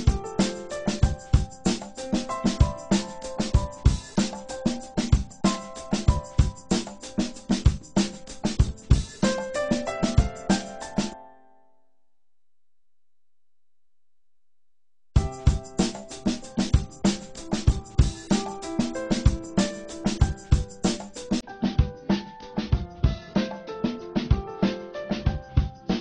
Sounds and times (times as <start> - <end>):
Music: 0.0 - 11.9, 15.2 - 26.0.